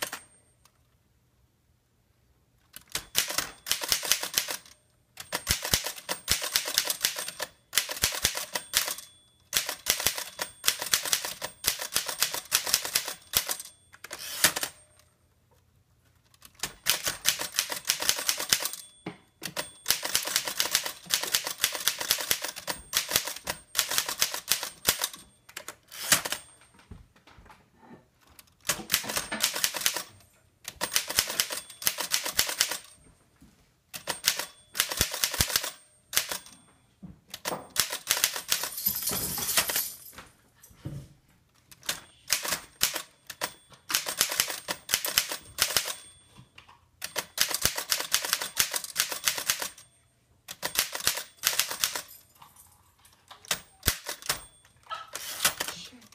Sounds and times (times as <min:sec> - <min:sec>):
Typewriter: 0:00.0 - 0:00.4, 0:02.6 - 0:15.1, 0:16.2 - 0:26.6, 0:28.4 - 0:33.0, 0:34.0 - 0:36.6, 0:37.3 - 0:38.8, 0:41.7 - 0:46.2, 0:47.0 - 0:49.9, 0:50.5 - 0:52.3, 0:53.2 - 0:56.1.